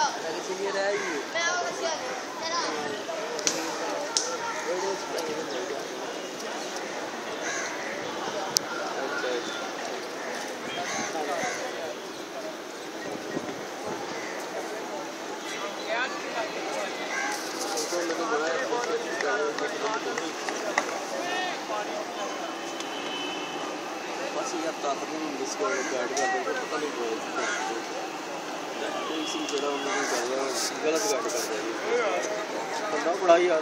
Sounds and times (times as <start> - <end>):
Speech: 0.0 - 7.2, 7.8 - 22.9, 23.7 - 33.6.